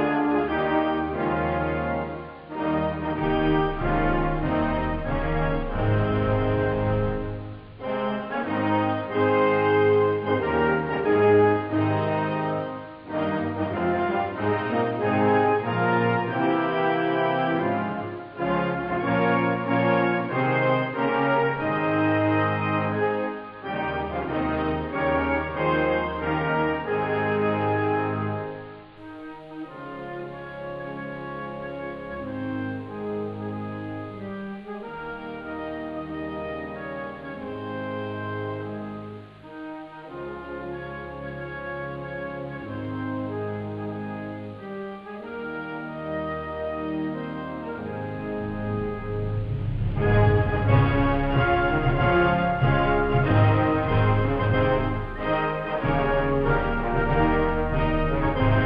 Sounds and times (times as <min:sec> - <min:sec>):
Music: 0:00.0 - 0:58.6.